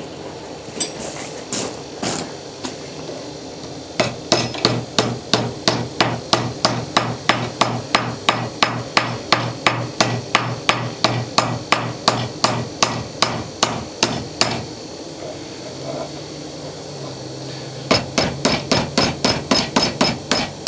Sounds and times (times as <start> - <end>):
Hammer: 4.0 - 14.6, 17.9 - 20.6.